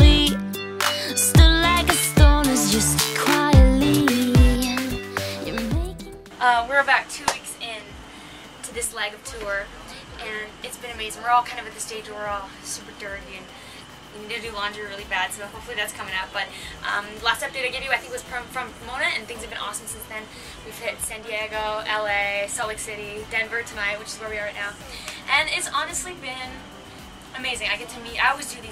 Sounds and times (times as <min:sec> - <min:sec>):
Speech: 0:06.4 - 0:08.0, 0:08.6 - 0:13.5, 0:14.2 - 0:26.6, 0:27.3 - 0:28.7.